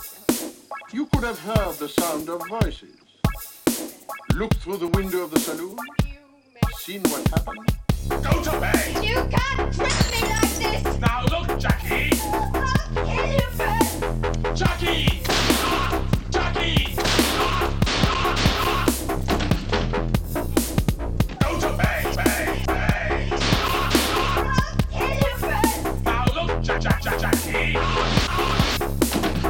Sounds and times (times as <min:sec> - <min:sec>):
Dubstep: 0:00.0 - 0:29.5
Speech: 0:01.0 - 0:02.9, 0:04.4 - 0:07.5, 0:08.2 - 0:14.0, 0:24.5 - 0:27.3.